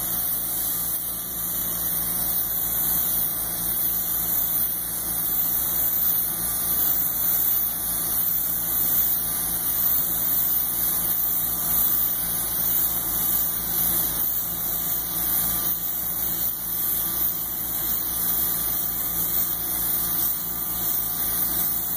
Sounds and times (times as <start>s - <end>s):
Pump (liquid): 0.0s - 21.9s.